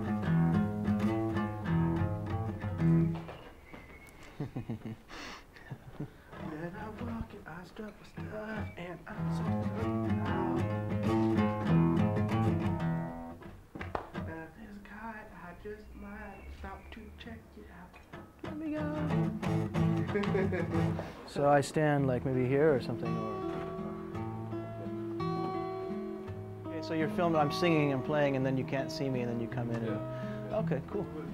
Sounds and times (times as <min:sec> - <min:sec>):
Music: 0:00.0 - 0:03.4, 0:06.3 - 0:31.3.